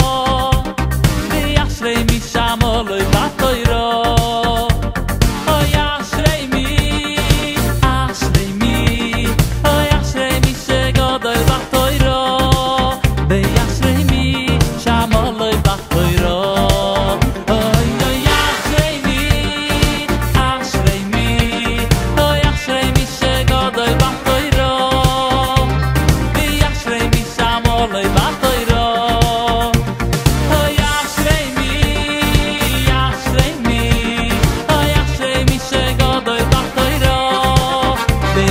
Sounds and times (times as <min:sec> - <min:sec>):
Funny music: 0:00.0 - 0:38.5
Independent music: 0:00.0 - 0:38.5
Soundtrack music: 0:00.0 - 0:38.5.